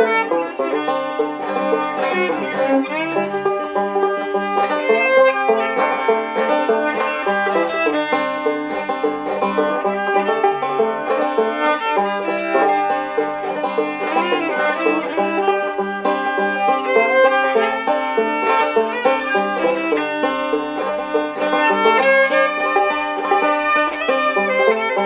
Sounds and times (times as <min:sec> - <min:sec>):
Banjo: 0:00.0 - 0:25.0.